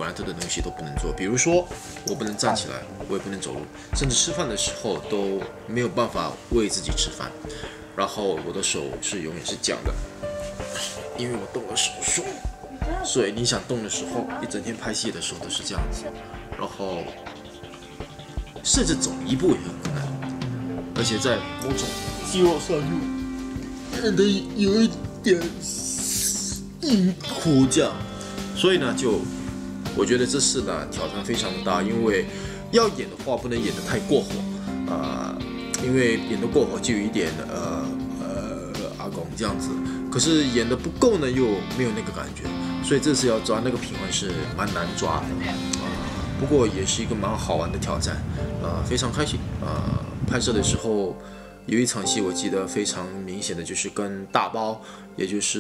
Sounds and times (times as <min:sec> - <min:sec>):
Speech: 0:00.0 - 0:07.4, 0:08.0 - 0:10.0, 0:11.2 - 0:17.2, 0:18.6 - 0:20.2, 0:21.0 - 0:23.1, 0:24.0 - 0:28.0, 0:28.6 - 0:29.3, 0:30.0 - 0:55.6
Music: 0:00.0 - 0:55.6.